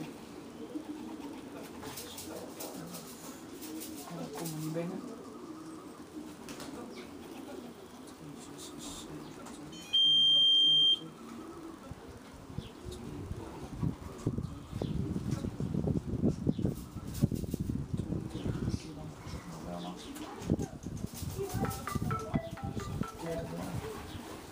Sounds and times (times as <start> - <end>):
Pigeon, dove: 0.0 - 24.5
Speech: 6.8 - 11.3, 18.0 - 24.1.